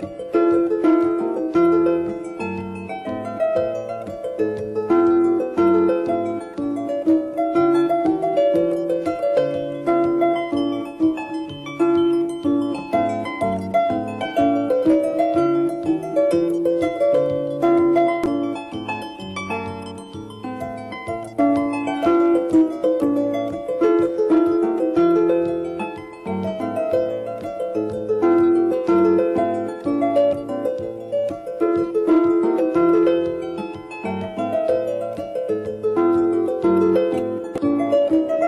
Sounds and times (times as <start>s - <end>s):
Music: 0.0s - 38.4s.